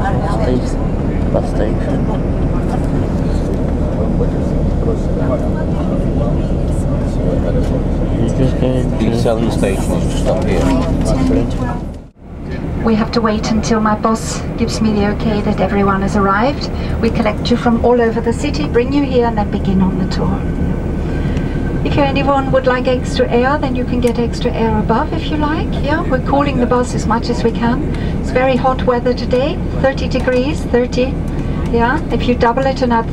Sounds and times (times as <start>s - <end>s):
Speech: 0.0s - 11.9s, 12.5s - 20.5s, 21.9s - 33.1s.